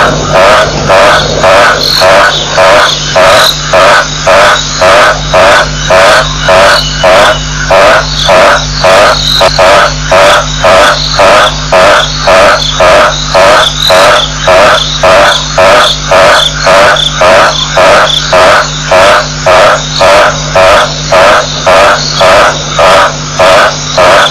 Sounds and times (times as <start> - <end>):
Bird: 0.8 - 23.0.